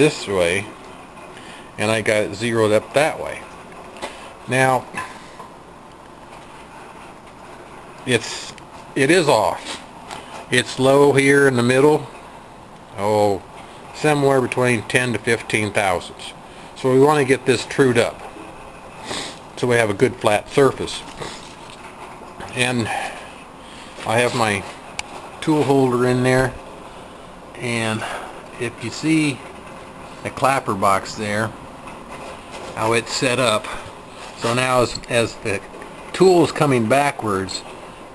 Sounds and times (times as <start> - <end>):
Speech: 0.0 - 0.8, 1.8 - 3.5, 4.5 - 5.1, 8.0 - 9.8, 10.5 - 12.1, 12.9 - 18.2, 19.6 - 21.2, 22.5 - 23.2, 24.0 - 24.8, 25.4 - 26.6, 27.5 - 29.4, 30.2 - 31.6, 32.8 - 33.8, 34.4 - 37.7.